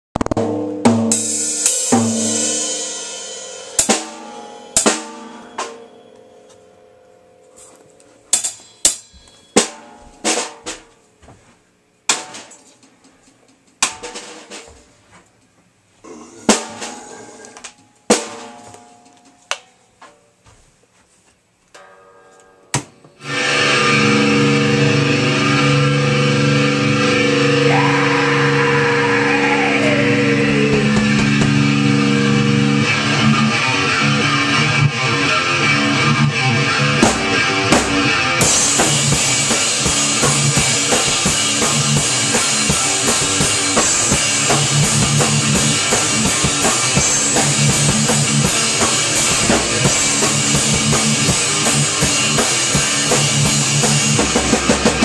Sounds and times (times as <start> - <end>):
Drum kit: 0.1 - 6.7, 7.5 - 20.2, 22.8 - 55.0.